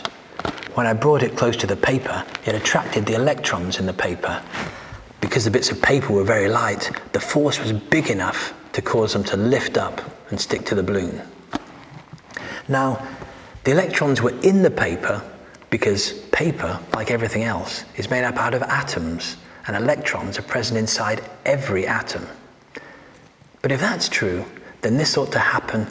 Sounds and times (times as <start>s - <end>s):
Speech: 0.7s - 4.5s, 5.2s - 11.4s, 12.6s - 22.5s, 23.6s - 25.9s.